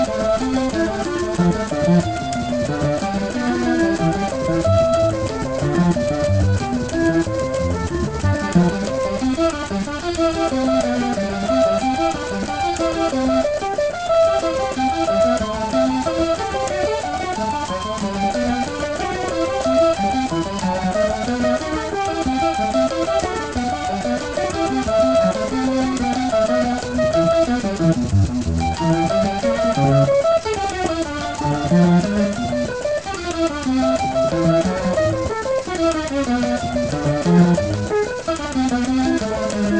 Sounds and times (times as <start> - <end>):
Sampler: 0.0 - 39.7.